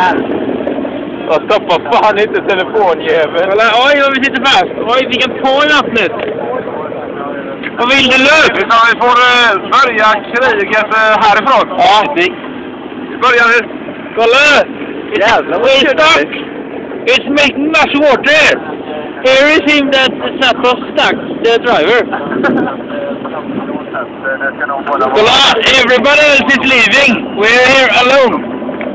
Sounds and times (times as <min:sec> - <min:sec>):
Speech: 0:01.3 - 0:12.4, 0:13.2 - 0:28.4.